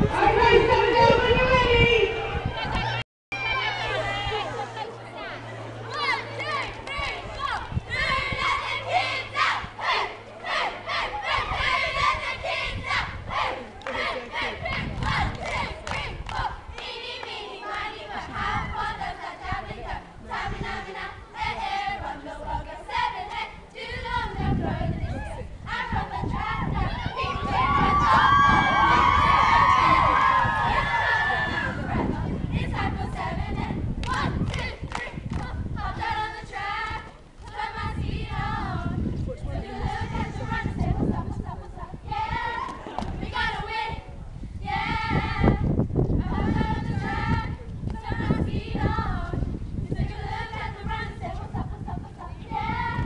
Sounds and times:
Speech: 0:00.1 - 0:03.0, 0:13.4 - 0:14.8, 0:39.2 - 0:41.6.

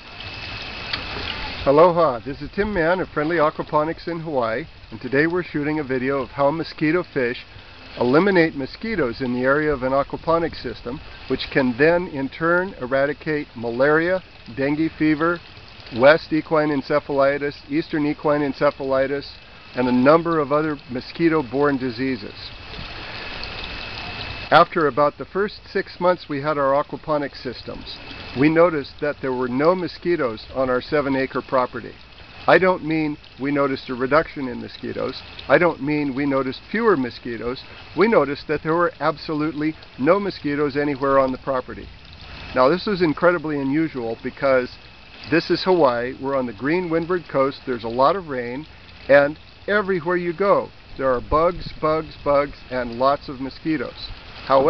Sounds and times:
Speech: 0:01.6 - 0:07.4, 0:08.0 - 0:22.5, 0:24.5 - 0:41.9, 0:42.6 - 0:54.6.

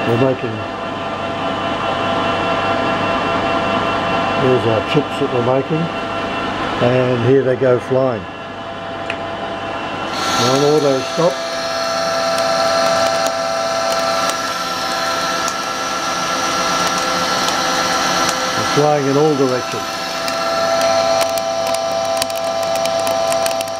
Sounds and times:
Speech: 0:00.0 - 0:00.7, 0:04.4 - 0:05.9, 0:06.8 - 0:08.3, 0:10.4 - 0:11.4, 0:18.6 - 0:19.9.

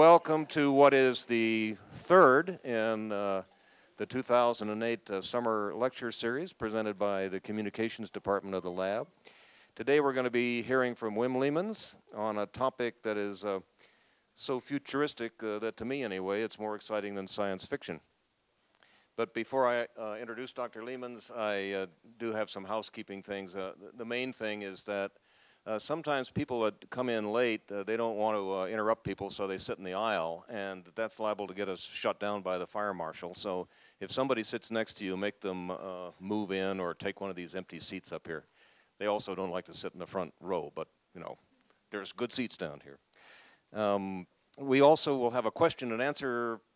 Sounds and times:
Speech: 0:00.0 - 0:09.2, 0:09.8 - 0:13.7, 0:14.4 - 0:18.1, 0:19.2 - 0:43.0, 0:43.7 - 0:46.7.

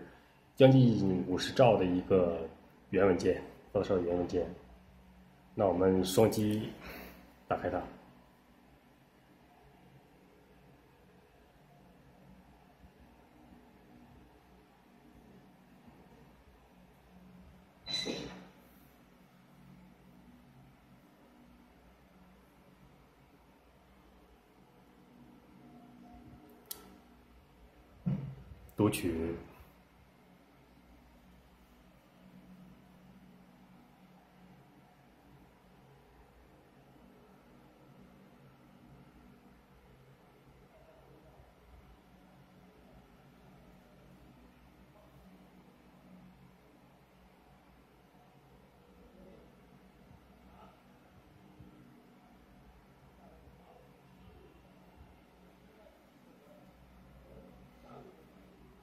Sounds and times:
Speech: 0:00.6 - 0:04.7, 0:05.6 - 0:06.8, 0:07.5 - 0:08.0, 0:28.7 - 0:29.6.

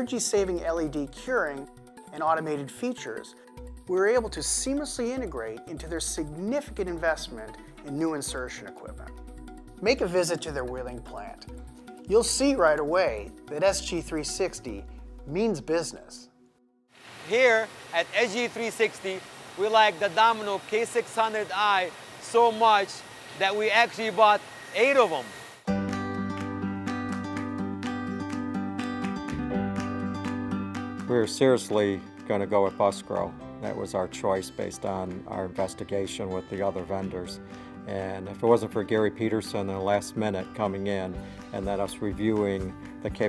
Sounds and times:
Speech: 0:00.0 - 0:03.3, 0:03.9 - 0:09.1, 0:09.8 - 0:11.5, 0:12.1 - 0:16.3, 0:17.3 - 0:25.3, 0:31.1 - 0:43.2
Music: 0:00.0 - 0:16.9, 0:25.7 - 0:43.2.

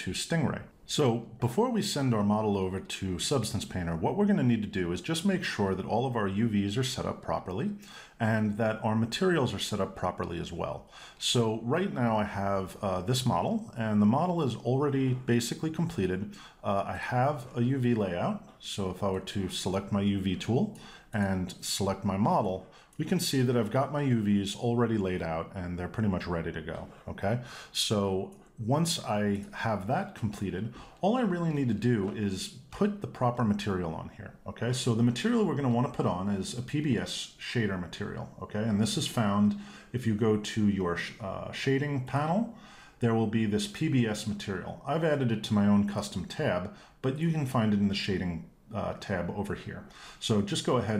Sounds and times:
Speech: 0:00.0 - 0:50.9.

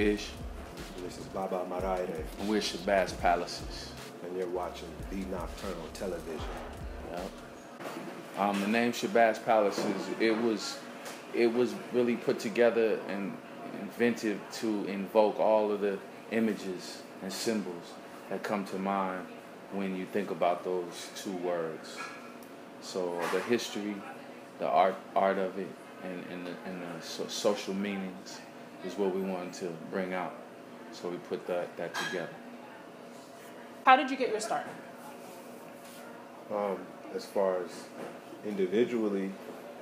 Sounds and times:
Music: 0:00.0 - 0:07.7
Speech: 0:01.0 - 0:07.3, 0:08.4 - 0:10.8, 0:11.4 - 0:22.0, 0:22.8 - 0:30.4, 0:31.0 - 0:32.3, 0:36.5 - 0:39.4.

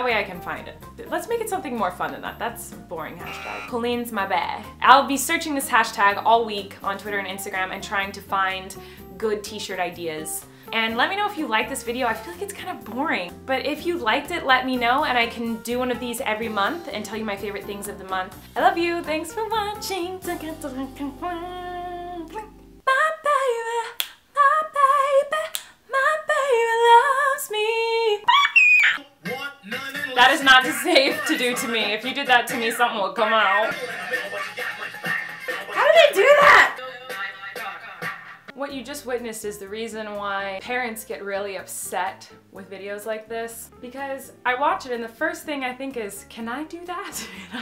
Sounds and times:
Speech: 0:00.0 - 0:19.9, 0:29.3 - 0:33.8, 0:35.8 - 0:36.8, 0:38.5 - 0:47.3
Music: 0:00.0 - 0:22.9, 0:29.0 - 0:47.6.

